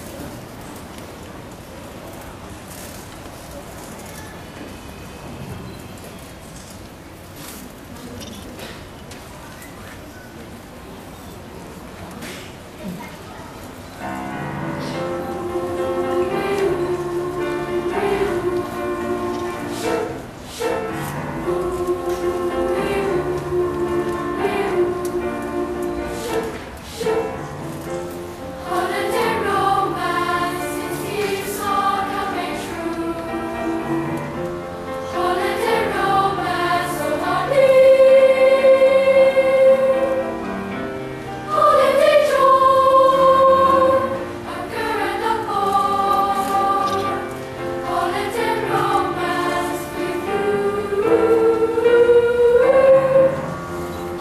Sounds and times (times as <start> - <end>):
Choir: 14.0 - 54.2.